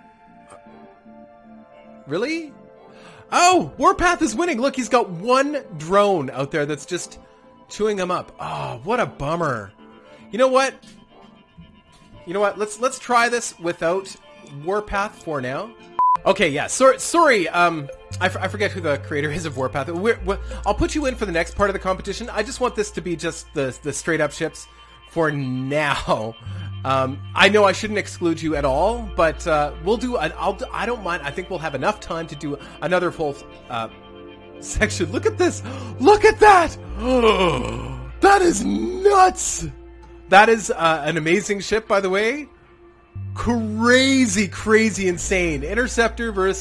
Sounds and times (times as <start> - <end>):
Music: 0.0 - 46.6
Speech: 2.1 - 2.5, 3.3 - 9.7, 10.3 - 10.8, 12.3 - 24.6, 25.2 - 33.9, 34.6 - 42.5, 43.4 - 46.6.